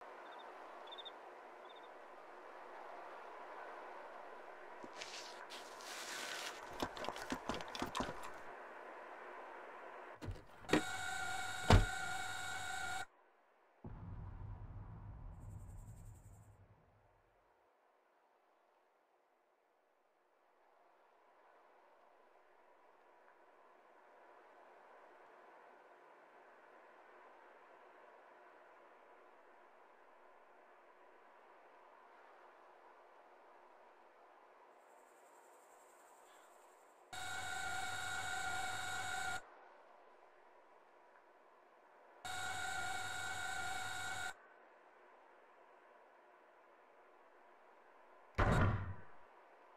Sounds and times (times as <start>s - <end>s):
Silence: 13.1s - 37.3s.